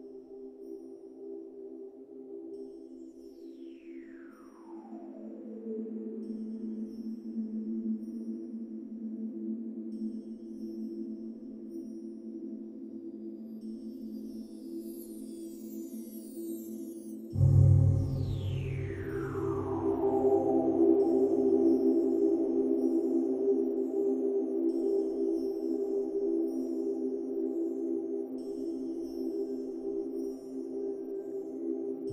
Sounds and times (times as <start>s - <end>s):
Music: 0.0s - 32.1s.